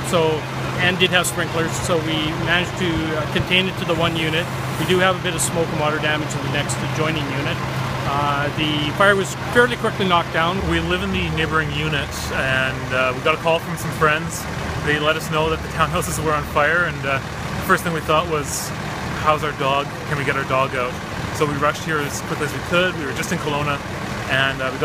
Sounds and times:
Speech: 0:00.0 - 0:24.8.

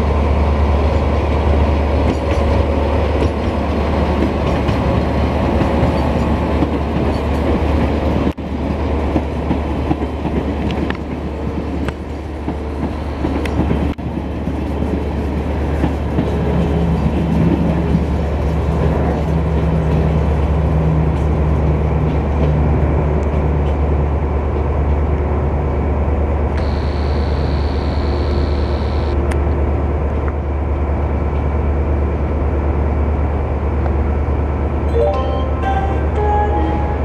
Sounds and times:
Railroad car, train wagon: 0:00.0 - 0:37.0
Subway, metro, underground: 0:00.0 - 0:37.0
Train: 0:00.0 - 0:37.0.

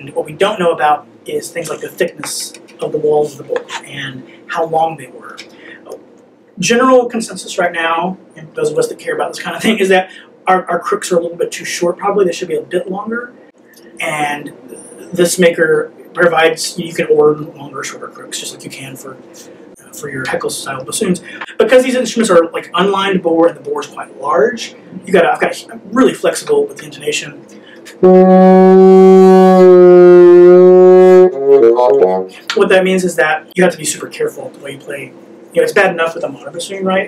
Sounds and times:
Speech: 0:00.0 - 0:06.0, 0:06.6 - 0:28.1, 0:31.2 - 0:37.0
Inside, small room: 0:00.0 - 0:37.0
Wind instrument, woodwind instrument: 0:28.0 - 0:32.3.

